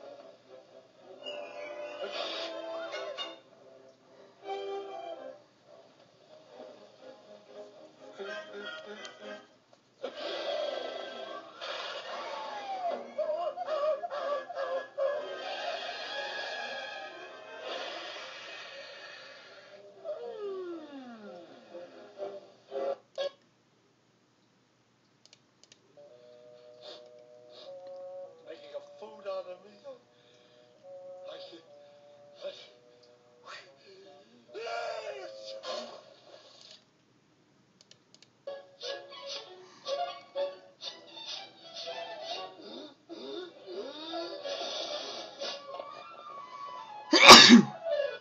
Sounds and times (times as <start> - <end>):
Music: 0.0 - 23.4, 26.0 - 36.8, 38.4 - 48.2
Speech: 28.5 - 30.0, 33.5 - 35.5.